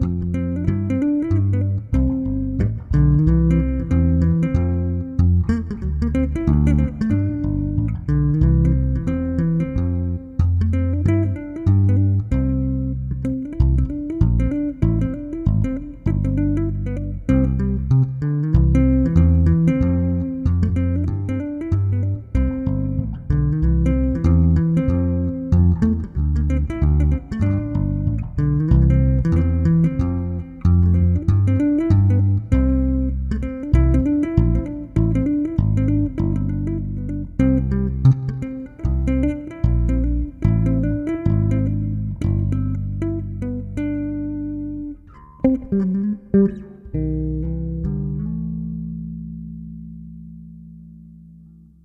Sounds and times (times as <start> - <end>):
Bass guitar: 0.0 - 51.8
Electronic tuner: 0.0 - 51.8.